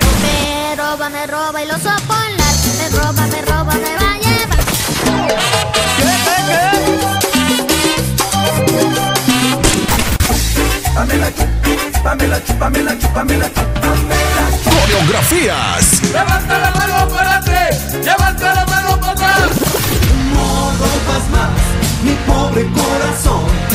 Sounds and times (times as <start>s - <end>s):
Disco: 0.0s - 23.7s.